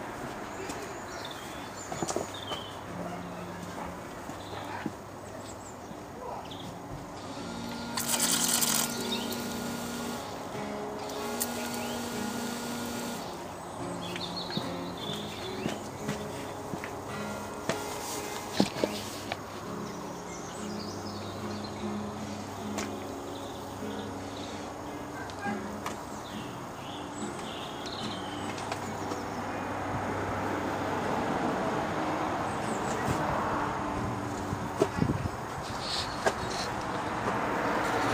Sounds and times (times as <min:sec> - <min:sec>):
Speech: 0:00.5 - 0:01.2, 0:06.2 - 0:06.6, 0:25.2 - 0:25.8
Music: 0:06.6 - 0:30.9.